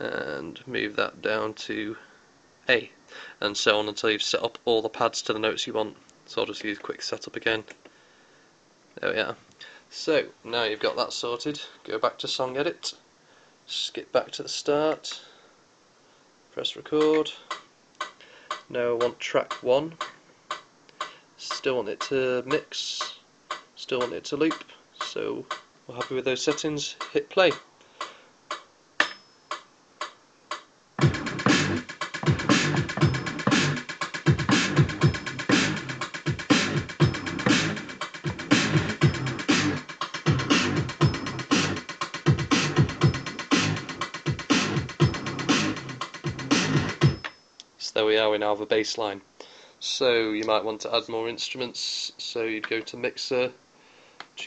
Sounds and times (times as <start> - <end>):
Scratching (performance technique): 30.0 - 47.2.